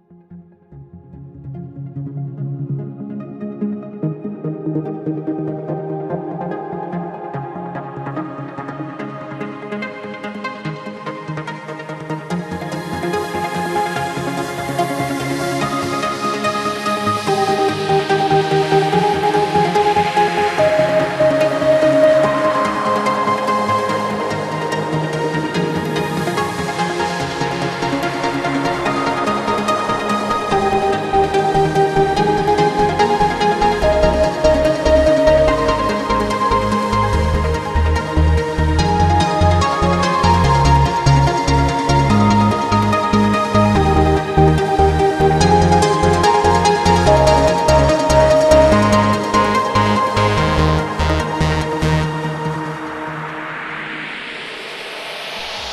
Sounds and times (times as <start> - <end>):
Techno: 4.9 - 55.7.